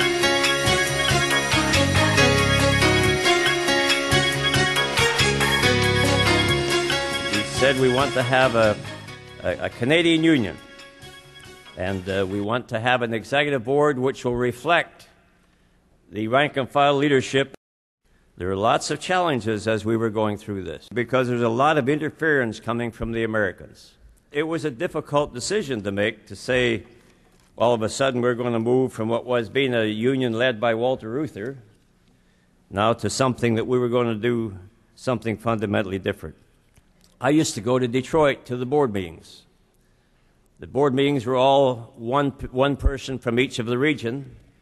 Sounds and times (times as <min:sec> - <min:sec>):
Speech: 0:07.4 - 0:08.8, 0:09.4 - 0:10.6, 0:11.8 - 0:15.2, 0:16.1 - 0:17.6, 0:18.4 - 0:26.9, 0:27.6 - 0:31.7, 0:32.7 - 0:36.4, 0:37.2 - 0:39.5, 0:40.6 - 0:44.4.